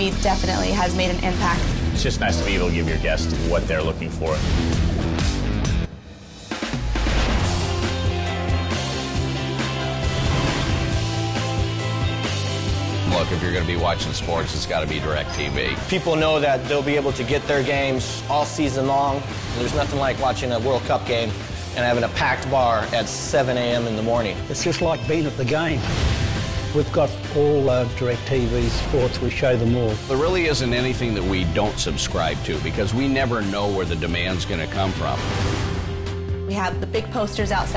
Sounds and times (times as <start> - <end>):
Music: 0.0 - 37.7
Speech: 13.1 - 25.8.